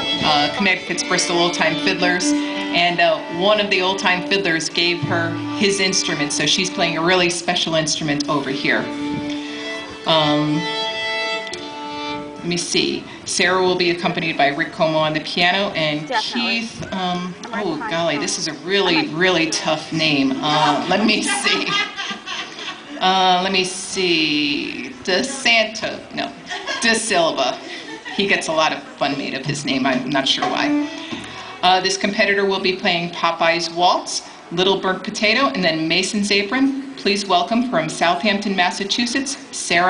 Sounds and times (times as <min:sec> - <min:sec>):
Speech: 0:12.5 - 0:21.7.